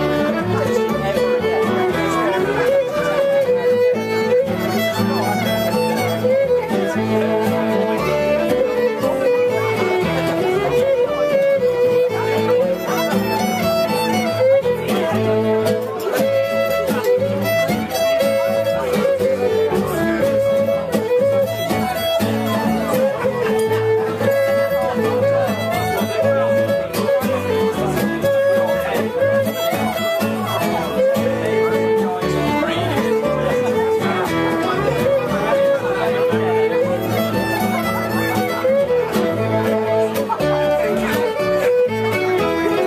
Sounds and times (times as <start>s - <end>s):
Violin, fiddle: 0.0s - 42.8s.